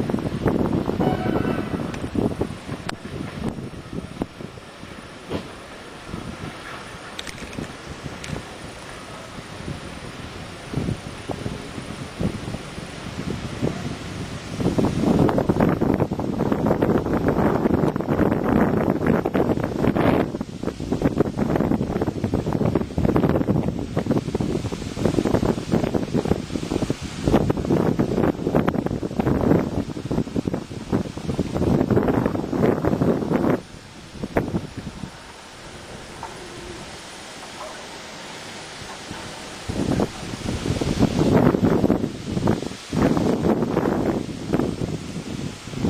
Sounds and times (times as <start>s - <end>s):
Rustling leaves: 0.0s - 45.8s.